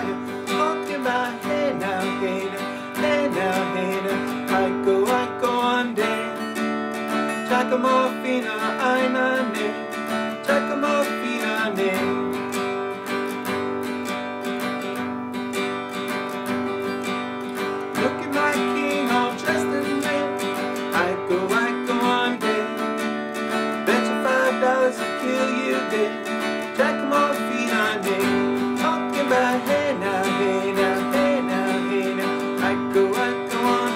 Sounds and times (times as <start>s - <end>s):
Singing: 0.0s - 6.4s, 7.4s - 12.2s, 18.0s - 23.0s, 23.9s - 33.9s.